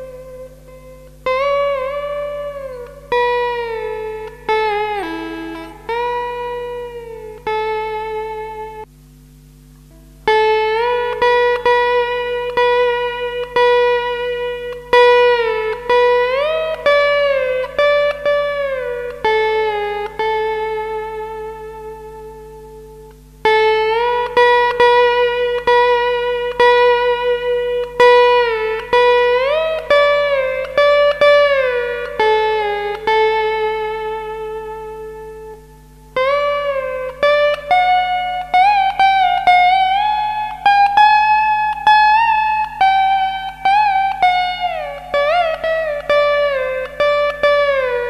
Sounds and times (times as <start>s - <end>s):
Guitar: 0.0s - 48.0s.